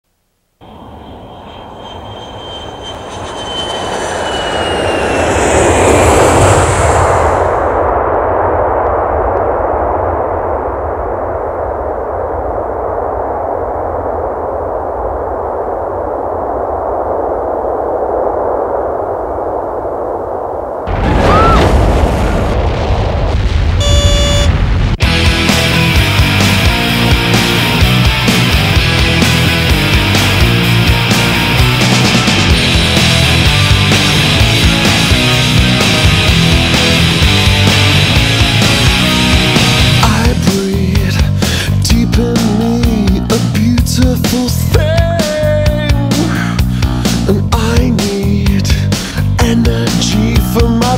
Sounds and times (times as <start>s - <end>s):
Aircraft engine: 0.6s - 17.1s, 25.0s - 40.1s.